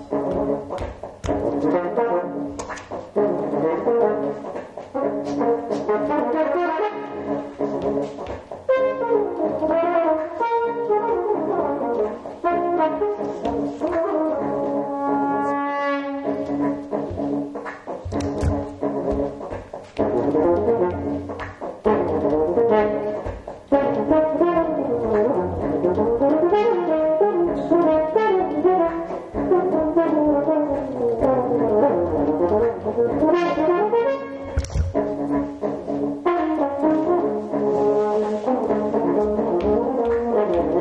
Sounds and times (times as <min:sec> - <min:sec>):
Music: 0:00.0 - 0:40.8.